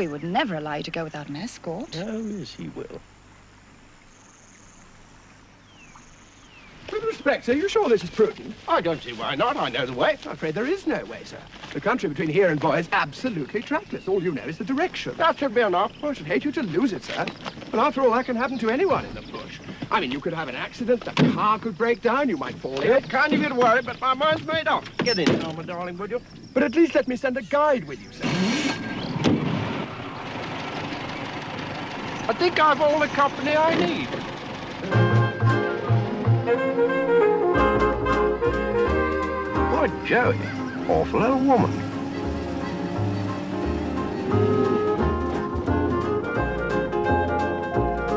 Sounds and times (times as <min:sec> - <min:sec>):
Speech: 0:00.0 - 0:03.0, 0:06.9 - 0:28.3, 0:32.3 - 0:34.2, 0:39.7 - 0:41.8
Saxophone: 0:34.8 - 0:48.1.